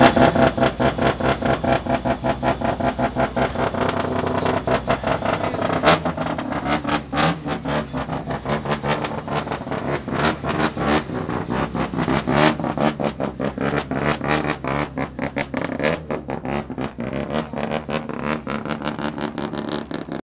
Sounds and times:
Idling: 0.0s - 17.0s
Vehicle: 0.0s - 20.2s.

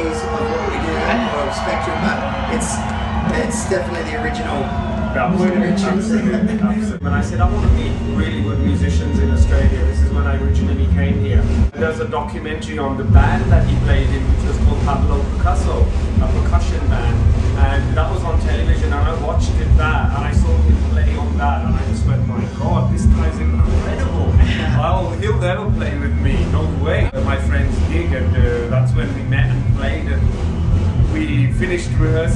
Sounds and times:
Speech: 0.0s - 30.4s, 31.1s - 32.3s
Music: 0.0s - 32.3s.

